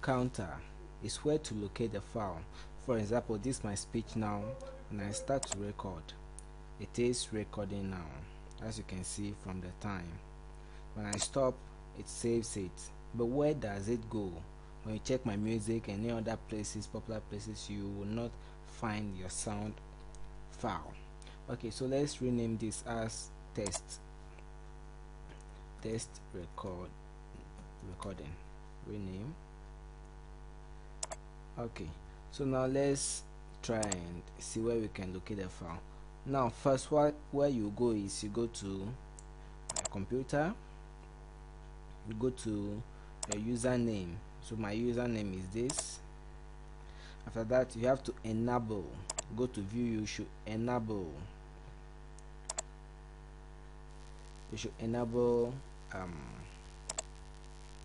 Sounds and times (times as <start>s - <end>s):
Speech: 0.0s - 6.2s, 6.8s - 10.3s, 11.0s - 19.8s, 20.5s - 24.0s, 25.8s - 29.4s, 31.6s - 39.0s, 39.8s - 40.6s, 42.0s - 46.1s, 47.3s - 51.4s, 54.5s - 56.6s.